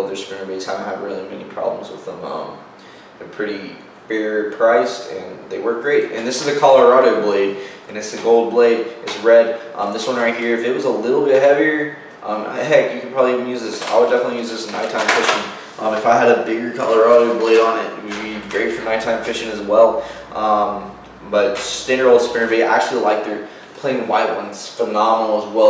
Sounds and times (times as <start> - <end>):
Speech: 0.0 - 25.6.